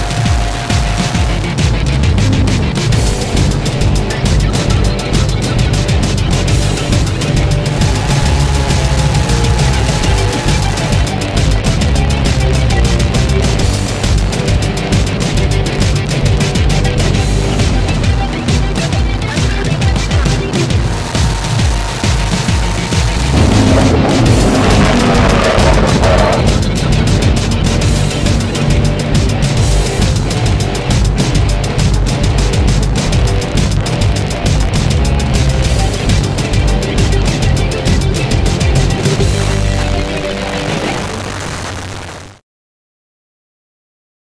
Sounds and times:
Music: 0:00.0 - 0:42.4.

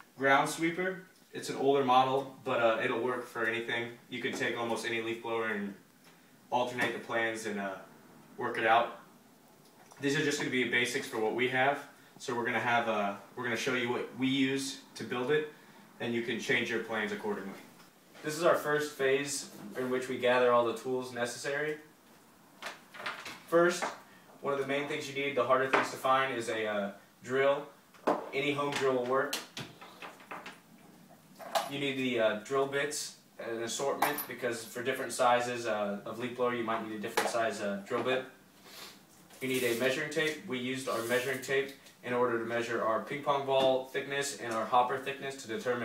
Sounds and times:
Speech: 0:00.2 - 0:05.8, 0:06.5 - 0:09.1, 0:10.0 - 0:21.9, 0:23.5 - 0:29.4, 0:31.6 - 0:38.4, 0:39.4 - 0:45.8.

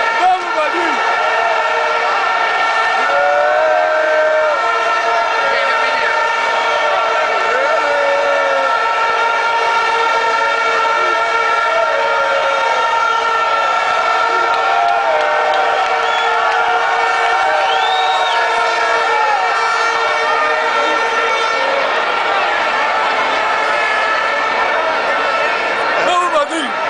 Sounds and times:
Speech: 0:00.2 - 0:01.0, 0:26.0 - 0:26.8.

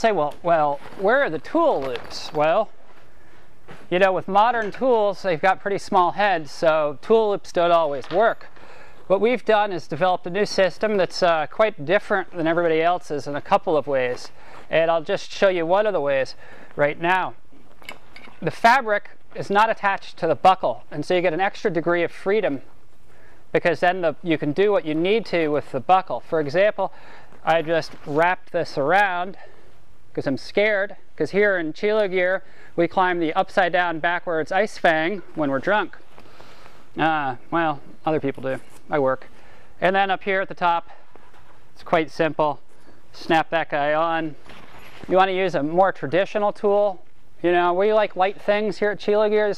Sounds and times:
Speech: 0:00.0 - 0:02.7, 0:03.9 - 0:08.5, 0:09.1 - 0:17.4, 0:18.4 - 0:22.7, 0:23.6 - 0:29.5, 0:30.2 - 0:36.0, 0:37.0 - 0:41.0, 0:41.8 - 0:42.6, 0:43.2 - 0:44.4, 0:45.1 - 0:49.5.

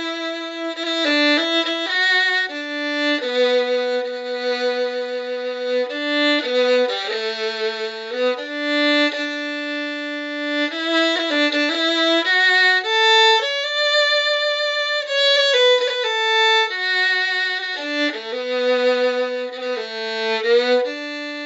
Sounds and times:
Violin, fiddle: 0:00.0 - 0:21.4.

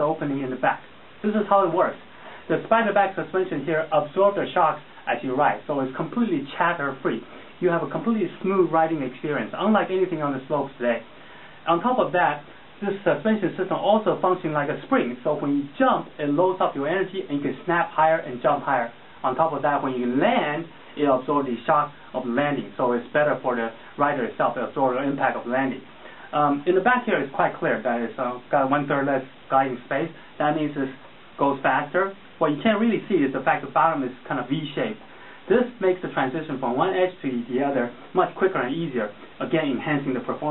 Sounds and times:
Speech: 0:00.0 - 0:40.5.

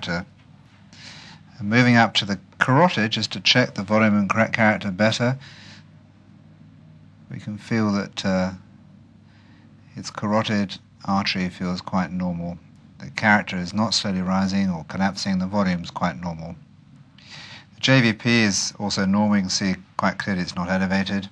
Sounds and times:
Speech: 0:00.0 - 0:00.3, 0:01.5 - 0:05.4, 0:07.3 - 0:08.7, 0:09.9 - 0:16.6, 0:17.8 - 0:21.3.

